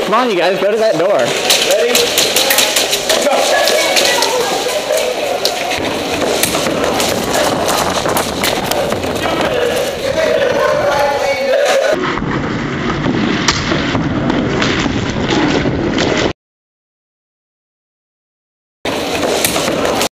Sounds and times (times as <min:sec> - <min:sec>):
Speech: 0:09.4 - 0:12.0.